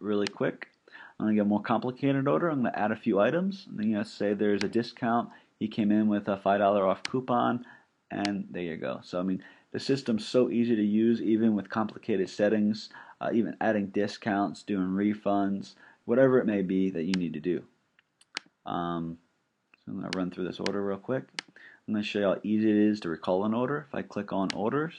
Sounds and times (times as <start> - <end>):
Speech: 0.0 - 17.7, 18.7 - 19.2, 19.8 - 24.9.